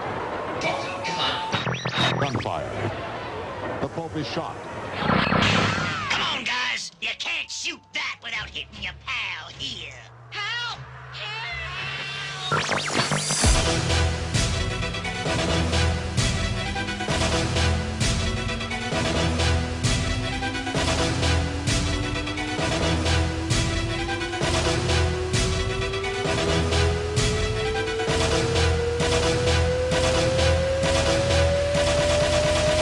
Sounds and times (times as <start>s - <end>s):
Music: 12.4s - 32.8s.